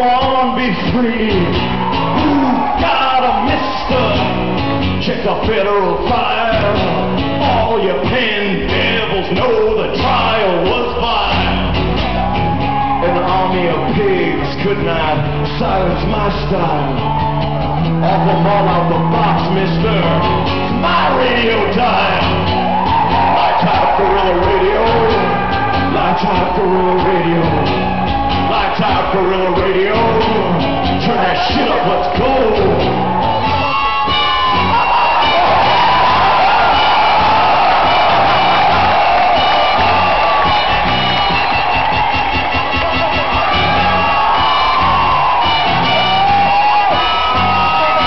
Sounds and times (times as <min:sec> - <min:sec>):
Blues: 0:00.0 - 0:48.0.